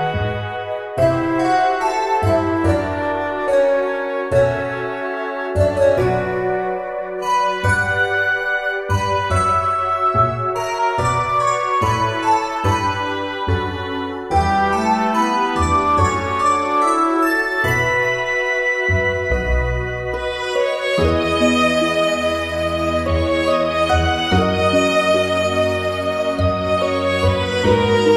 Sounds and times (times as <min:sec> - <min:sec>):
Sad music: 0:00.0 - 0:28.1.